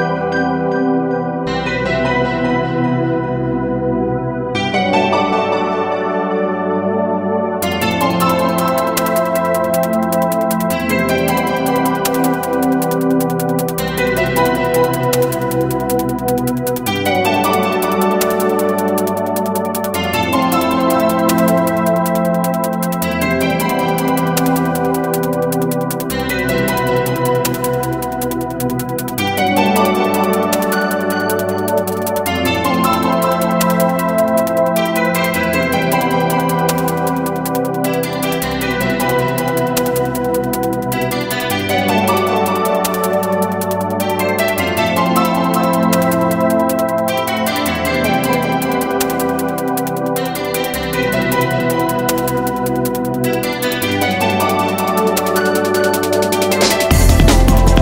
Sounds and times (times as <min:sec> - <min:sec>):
Music: 0:00.0 - 0:57.8.